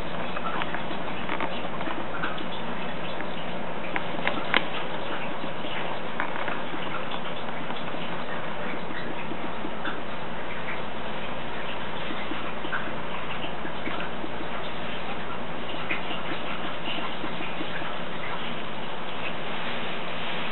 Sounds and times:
Inside, small room: 0.0s - 20.5s.

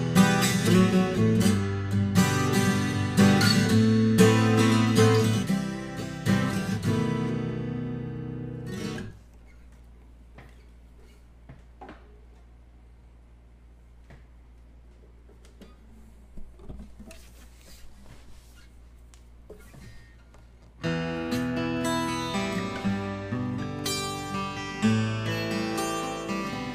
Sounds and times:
Acoustic guitar: 0.0s - 9.8s, 19.5s - 26.7s.

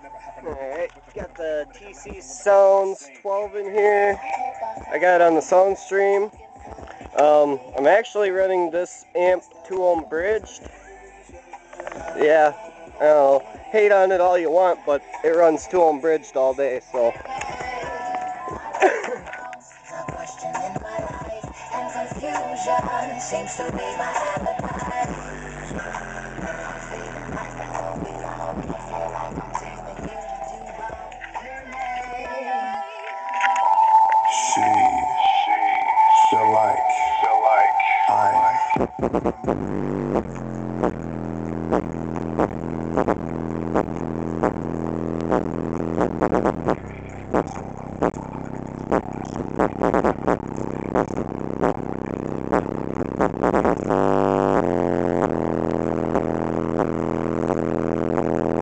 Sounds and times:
Music: 0.0s - 58.6s
Speech: 12.2s - 17.2s, 34.3s - 35.3s, 36.2s - 38.7s.

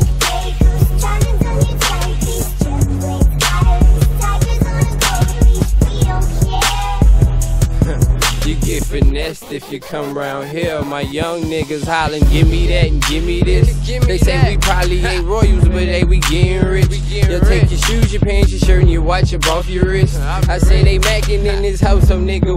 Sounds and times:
Disco: 0.0s - 22.5s.

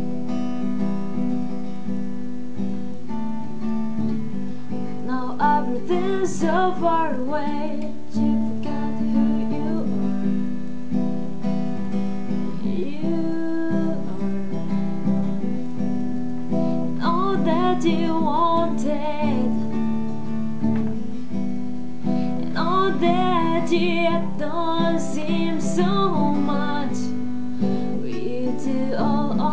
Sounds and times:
Acoustic guitar: 0.0s - 29.5s
Strum: 0.0s - 29.5s.

